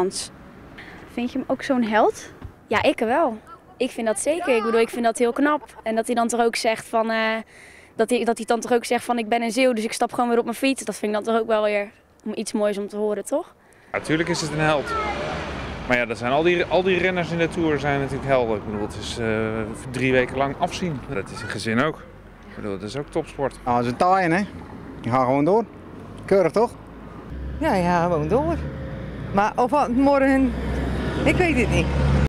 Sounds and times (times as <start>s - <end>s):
Vehicle: 0.0s - 4.8s, 13.8s - 32.2s.